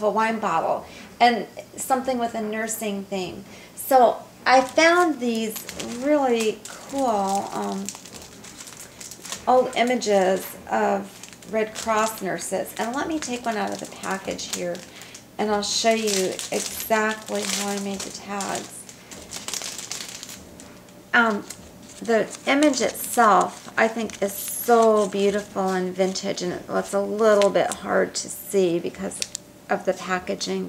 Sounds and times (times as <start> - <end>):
Speech: 0.0 - 8.0, 9.5 - 14.8, 15.4 - 18.8, 21.2 - 30.6.